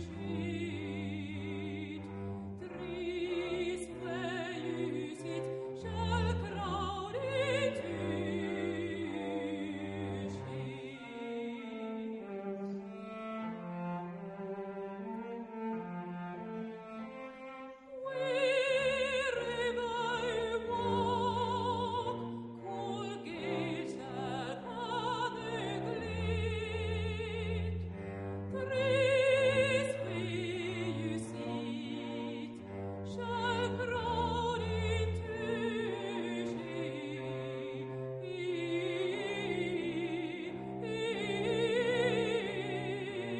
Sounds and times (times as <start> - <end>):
Music: 0.0 - 43.3.